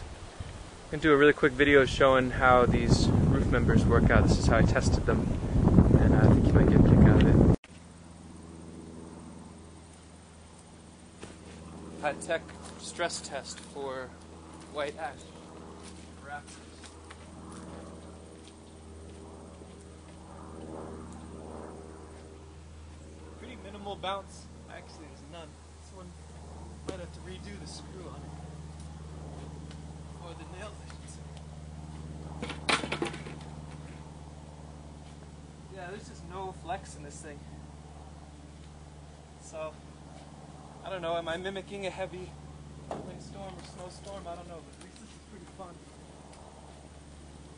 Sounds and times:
Speech: 0:00.9 - 0:05.2, 0:12.0 - 0:14.1, 0:14.7 - 0:15.3, 0:16.2 - 0:16.6, 0:23.4 - 0:26.2, 0:26.9 - 0:28.3, 0:30.2 - 0:31.2, 0:35.7 - 0:37.5, 0:39.4 - 0:39.8, 0:40.8 - 0:42.3, 0:43.0 - 0:45.8.

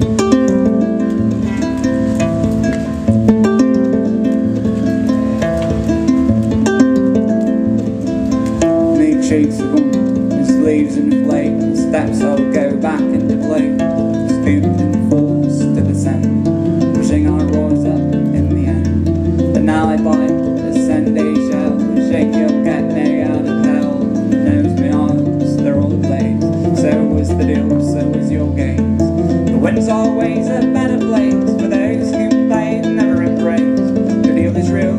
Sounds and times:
Plucked string instrument: 0:00.0 - 0:34.9.

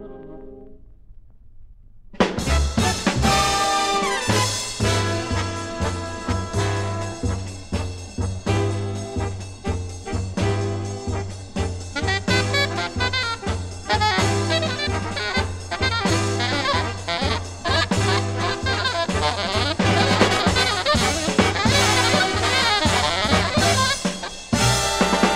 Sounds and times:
Jazz: 0:02.2 - 0:25.3
Orchestra: 0:02.2 - 0:25.3.

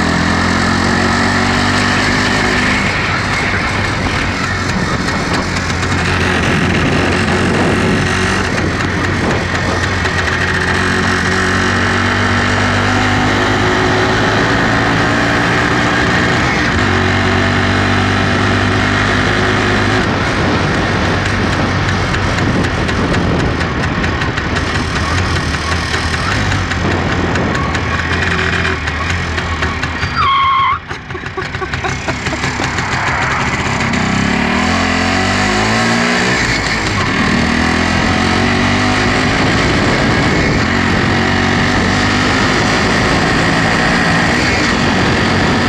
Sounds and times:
Motor vehicle (road): 0:00.0 - 0:45.6.

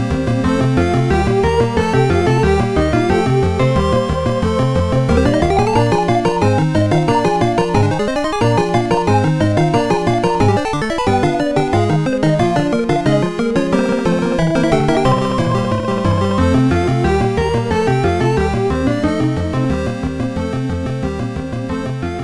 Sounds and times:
Theme music: 0:01.1 - 0:09.1, 0:12.0 - 0:20.0.

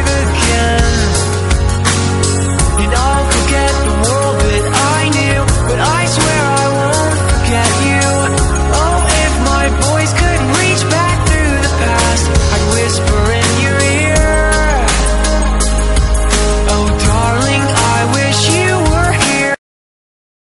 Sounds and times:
Music: 0:00.0 - 0:19.6.

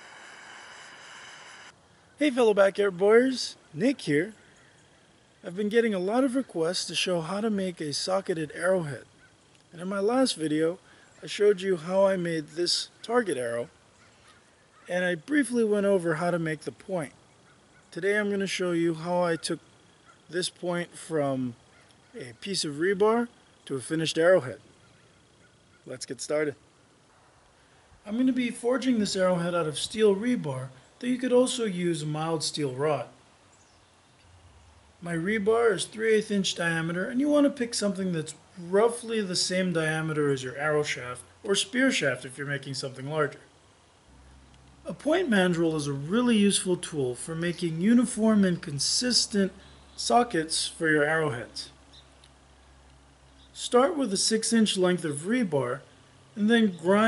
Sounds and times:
Speech: 0:02.2 - 0:04.4, 0:05.4 - 0:09.1, 0:09.7 - 0:13.7, 0:14.9 - 0:17.2, 0:17.9 - 0:19.6, 0:20.3 - 0:21.6, 0:22.2 - 0:24.6, 0:25.9 - 0:26.6, 0:28.0 - 0:33.2, 0:35.0 - 0:43.5, 0:44.9 - 0:51.8, 0:53.6 - 0:57.0.

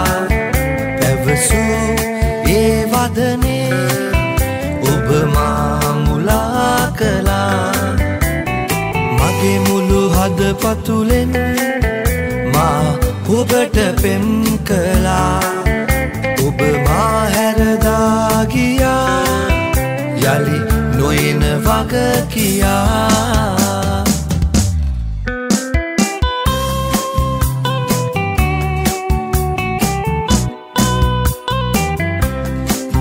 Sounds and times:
Soul music: 0:00.0 - 0:33.0.

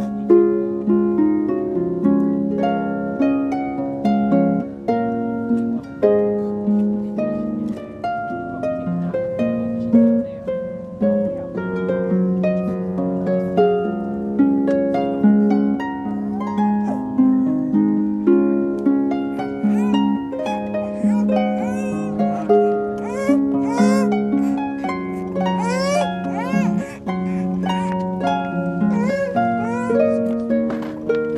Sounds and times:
Harp: 0:00.0 - 0:31.3.

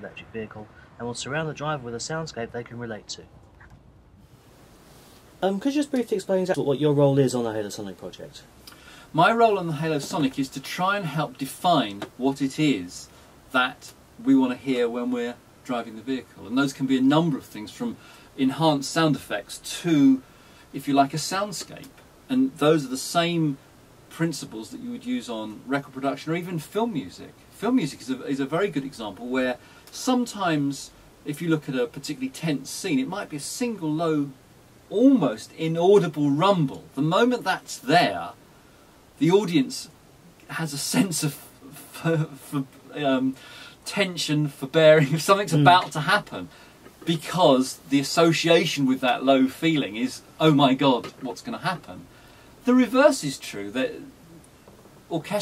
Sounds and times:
Speech: 0:00.0 - 0:03.3, 0:05.4 - 0:08.5, 0:09.1 - 0:38.4, 0:39.2 - 0:54.2, 0:55.1 - 0:55.4.

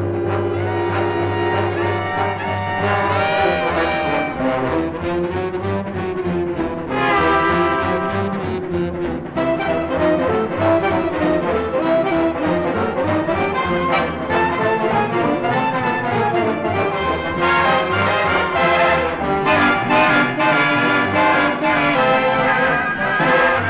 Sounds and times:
Swing music: 0:00.0 - 0:23.7.

